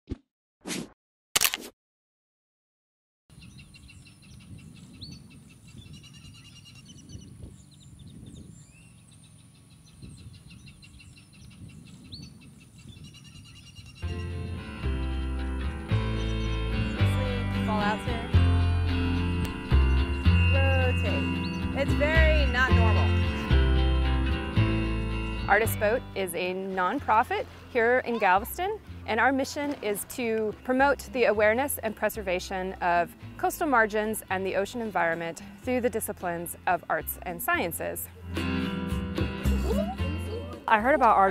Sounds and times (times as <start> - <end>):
Music: 14.0 - 41.3.